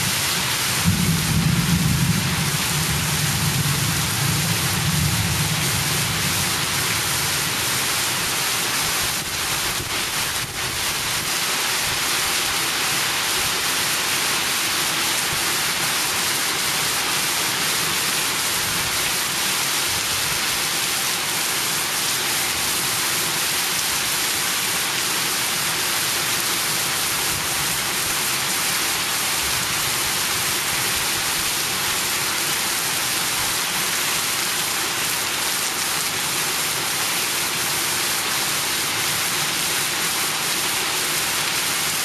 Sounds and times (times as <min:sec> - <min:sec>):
Rain on surface: 0:00.0 - 0:42.0.